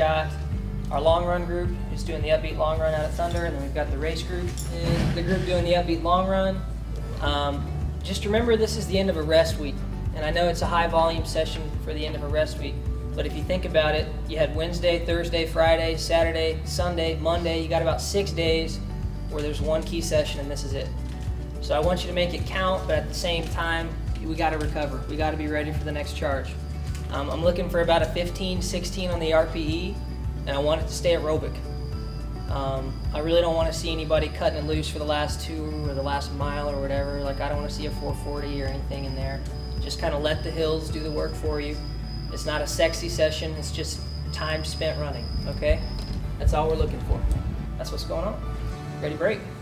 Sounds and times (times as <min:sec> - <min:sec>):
Male speech, man speaking: 0:00.0 - 0:21.0, 0:21.6 - 0:31.6, 0:32.5 - 0:48.4, 0:49.0 - 0:49.5
Music: 0:00.0 - 0:49.6.